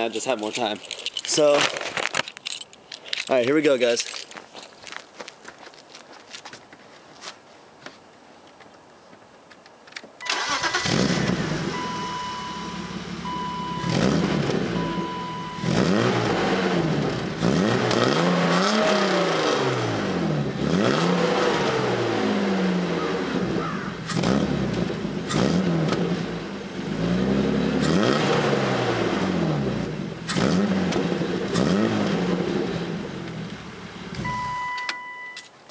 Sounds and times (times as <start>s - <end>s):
Car: 9.8s - 35.7s
Accelerating, revving, vroom: 10.8s - 11.8s, 13.8s - 14.9s, 15.5s - 32.9s.